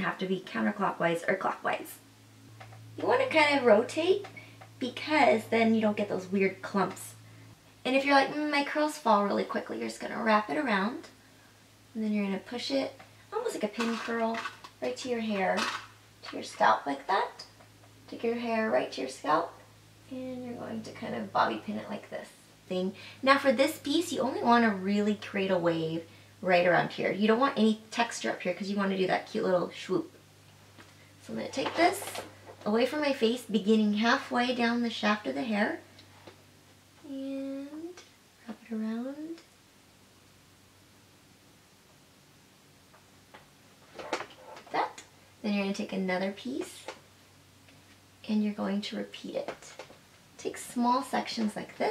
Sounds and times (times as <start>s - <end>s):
Speech: 0.0s - 2.0s, 3.0s - 7.2s, 7.8s - 11.1s, 11.9s - 30.2s, 31.2s - 35.9s, 37.0s - 39.5s, 44.7s - 47.0s, 48.2s - 49.8s, 50.4s - 51.9s
Inside, small room: 0.0s - 51.9s.